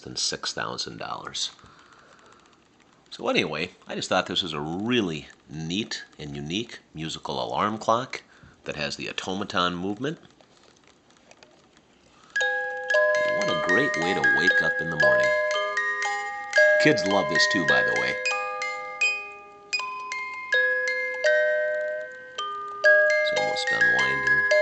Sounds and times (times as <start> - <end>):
Speech: 0.0 - 1.6, 3.1 - 10.3, 13.3 - 15.3, 16.8 - 18.2, 23.3 - 24.6
Alarm clock: 12.3 - 24.6.